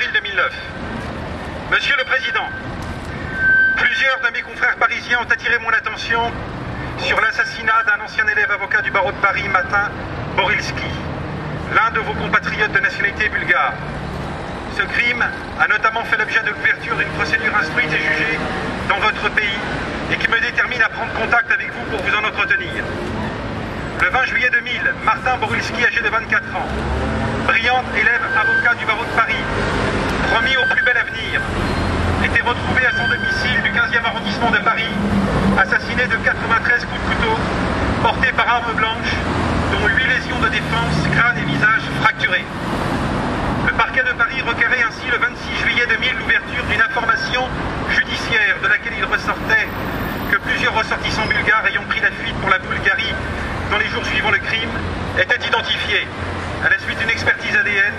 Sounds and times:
Speech: 0.0 - 0.8, 1.7 - 2.6, 3.8 - 6.4, 7.0 - 11.1, 11.7 - 13.8, 14.7 - 22.9, 24.0 - 26.8, 27.5 - 29.5, 30.2 - 31.5, 32.2 - 35.0, 35.6 - 42.5, 43.6 - 57.9.

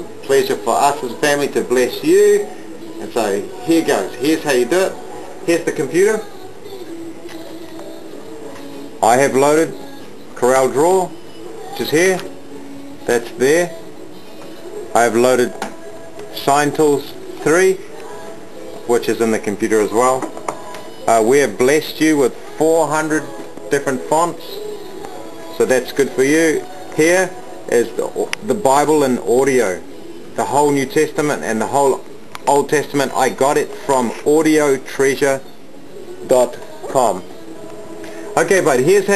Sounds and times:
Music: 0.0 - 39.1
Speech: 0.2 - 6.3, 9.0 - 9.8, 18.9 - 20.3, 21.1 - 24.6, 25.5 - 29.8, 30.4 - 35.4, 36.3 - 37.2, 38.4 - 39.1.

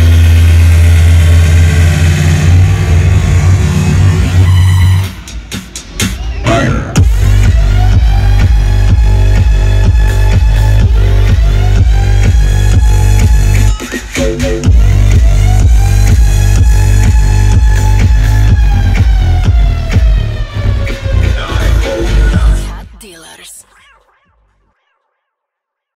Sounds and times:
Dance music: 0.0 - 24.9.

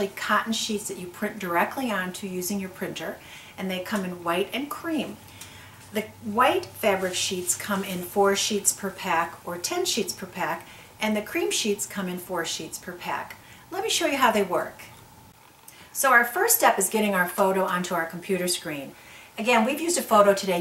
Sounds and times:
Speech: 0.0 - 5.2, 5.9 - 14.9, 16.0 - 20.6.

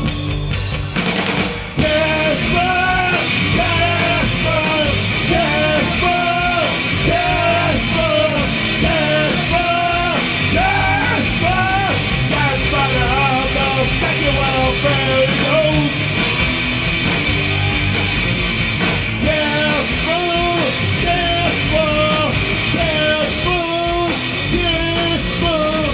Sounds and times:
Music: 0.0 - 25.9
Singing: 1.8 - 16.0.

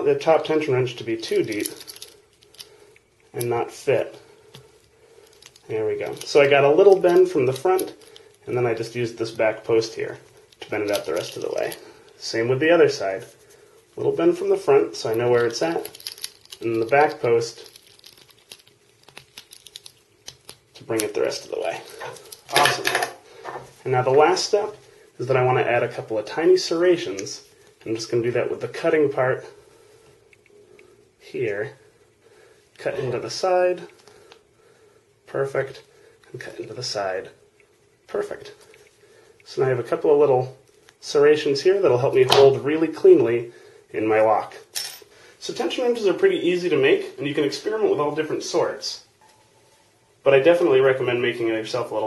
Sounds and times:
Speech: 0.0 - 1.8, 3.3 - 4.2, 5.7 - 13.3, 14.0 - 16.0, 16.6 - 17.7, 20.8 - 23.2, 23.8 - 29.6, 31.2 - 31.8, 32.8 - 34.0, 35.3 - 37.4, 38.1 - 38.6, 39.5 - 44.8, 45.4 - 49.1, 50.2 - 52.0
Inside, small room: 0.0 - 52.0.

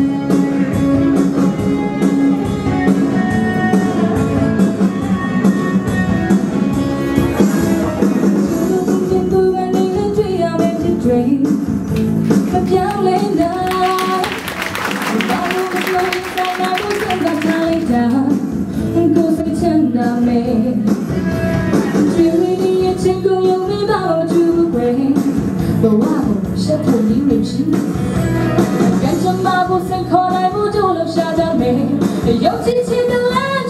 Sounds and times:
Music: 0.0 - 33.6.

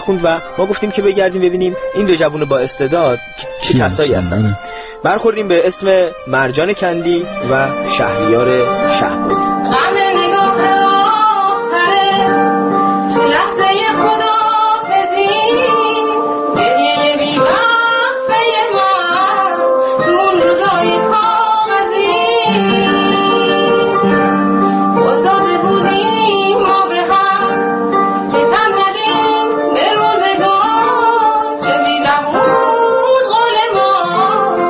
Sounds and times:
Music: 0.0 - 34.6.

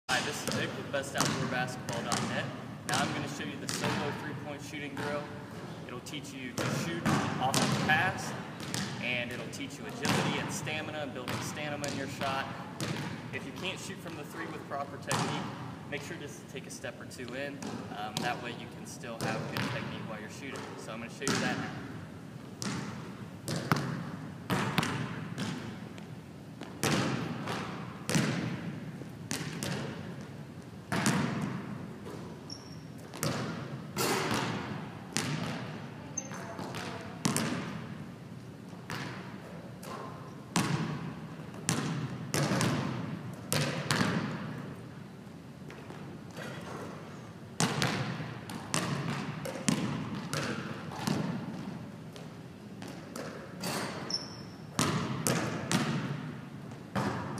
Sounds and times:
Basketball bounce: 0.1 - 4.2, 6.6 - 10.4, 11.3 - 13.7, 15.1 - 15.5, 19.2 - 19.9, 21.3 - 21.7, 22.6 - 25.8, 26.6 - 30.3, 30.9 - 37.8, 38.9 - 44.6, 47.6 - 57.3
Speech: 0.1 - 8.4, 9.0 - 12.5, 13.4 - 21.8.

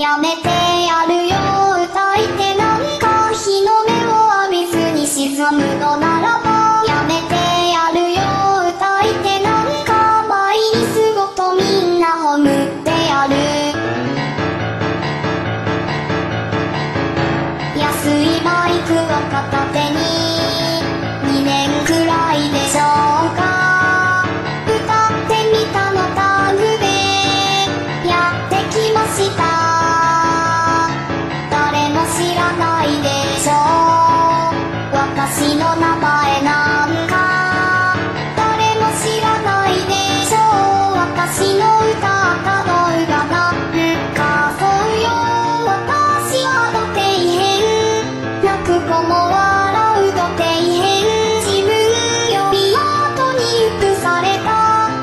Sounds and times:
Child singing: 0.0 - 13.9, 17.7 - 55.0
Music: 0.0 - 55.0.

